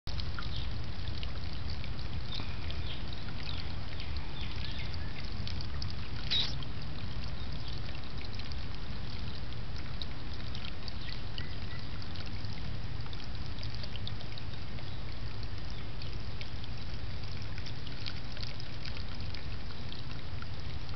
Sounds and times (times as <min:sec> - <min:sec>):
Outside, rural or natural: 0:00.0 - 0:20.9
Frog: 0:06.2 - 0:06.6.